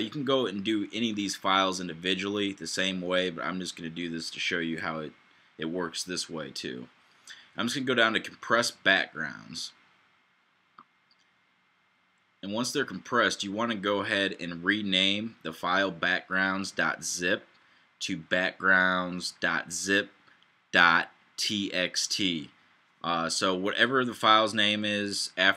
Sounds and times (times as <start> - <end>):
Speech: 0.0 - 9.8, 12.4 - 20.2, 20.8 - 25.5.